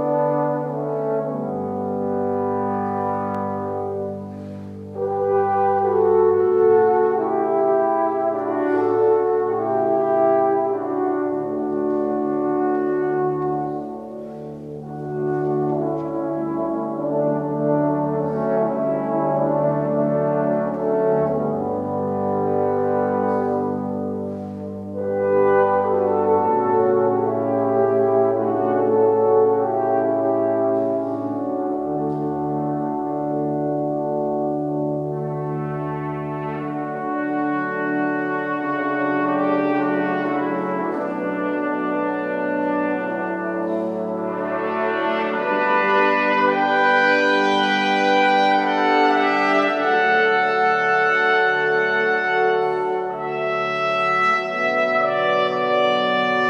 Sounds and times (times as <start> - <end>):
Music: 0.0 - 56.4.